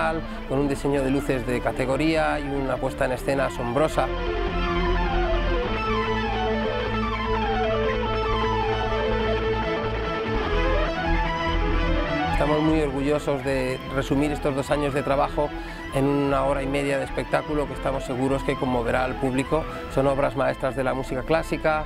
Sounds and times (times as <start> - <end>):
Speech: 0.0 - 4.1, 12.4 - 21.8
Guitar: 0.0 - 21.8.